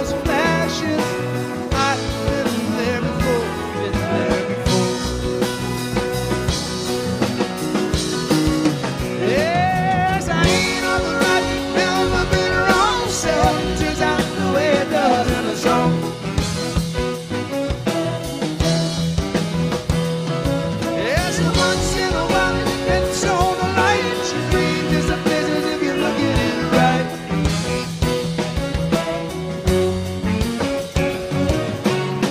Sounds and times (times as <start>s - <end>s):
Rock and roll: 0.0s - 32.3s
Singing: 9.2s - 16.1s, 21.0s - 27.3s.